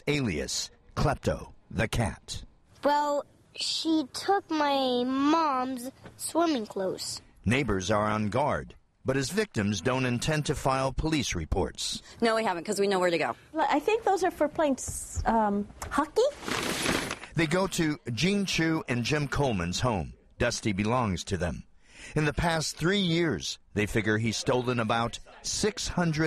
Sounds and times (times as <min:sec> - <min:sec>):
Speech: 0:00.0 - 0:03.1, 0:07.5 - 0:16.4, 0:17.4 - 0:26.2.